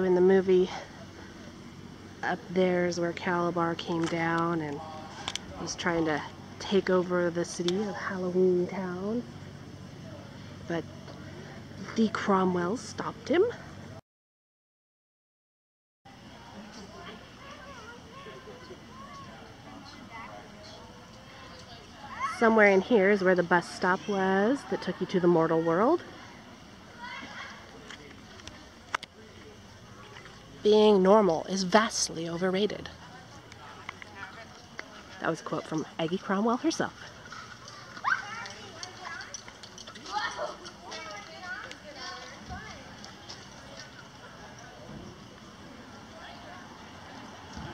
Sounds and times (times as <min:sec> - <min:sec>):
Outside, urban or manmade: 0:00.0 - 0:14.0, 0:16.0 - 0:47.7.